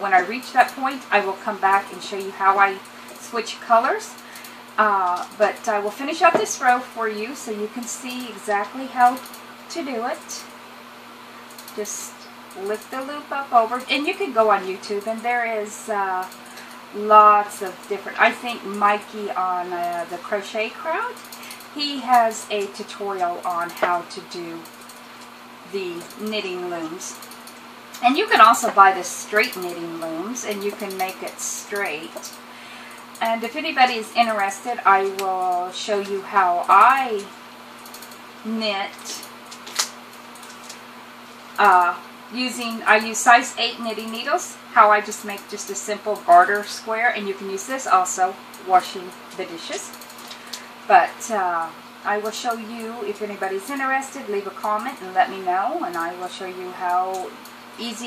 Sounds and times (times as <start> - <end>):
Speech: 0.0 - 10.5, 11.8 - 24.7, 25.7 - 27.2, 28.0 - 32.4, 33.2 - 37.4, 38.4 - 39.3, 41.6 - 49.9, 50.9 - 58.0
Inside, small room: 0.0 - 58.0.